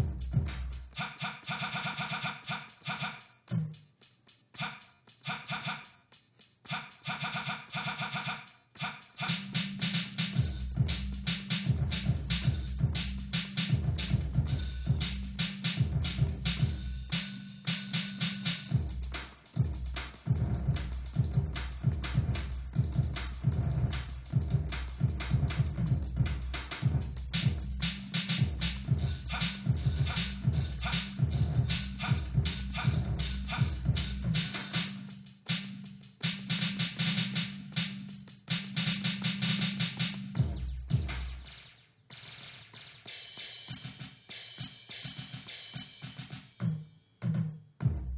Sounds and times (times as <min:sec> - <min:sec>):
Drum machine: 0:00.0 - 0:48.1.